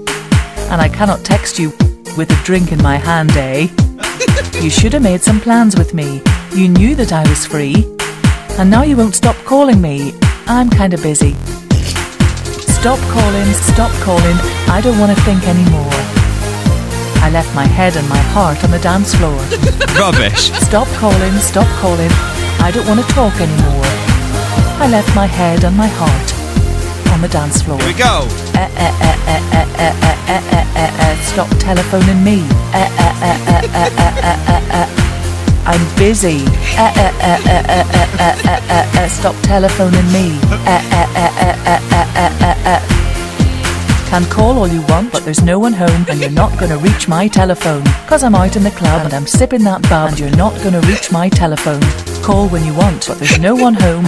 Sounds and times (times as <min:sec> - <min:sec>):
Music: 0:00.0 - 0:54.0
Speech: 0:00.7 - 0:07.9, 0:08.6 - 0:12.0, 0:12.7 - 0:16.1, 0:17.2 - 0:24.0, 0:24.8 - 0:26.4, 0:27.1 - 0:34.9, 0:35.7 - 0:42.8, 0:44.1 - 0:54.0.